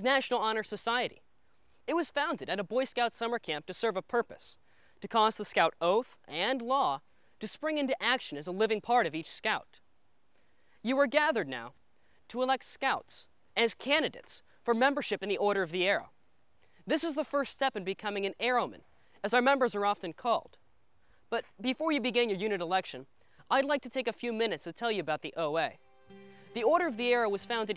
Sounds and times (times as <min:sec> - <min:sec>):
Speech: 0:00.0 - 0:01.2, 0:01.9 - 0:09.8, 0:10.8 - 0:16.1, 0:16.9 - 0:20.6, 0:21.3 - 0:25.8, 0:26.6 - 0:27.7.